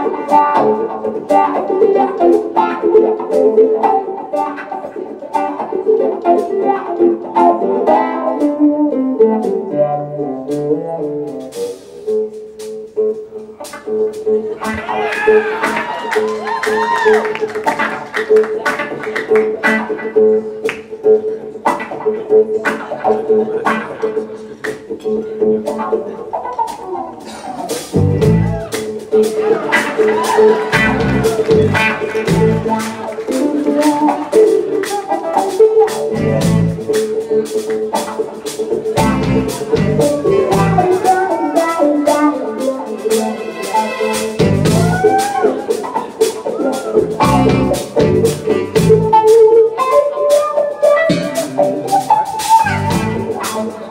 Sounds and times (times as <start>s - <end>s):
Inside, public space: 0.0s - 53.9s.